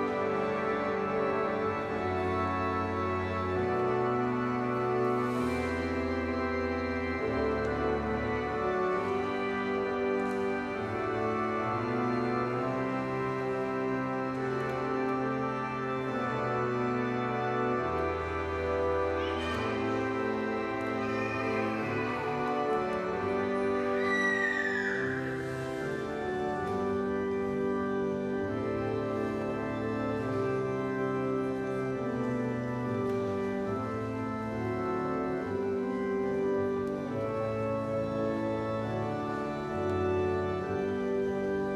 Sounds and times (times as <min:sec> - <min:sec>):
Music: 0:00.0 - 0:41.7.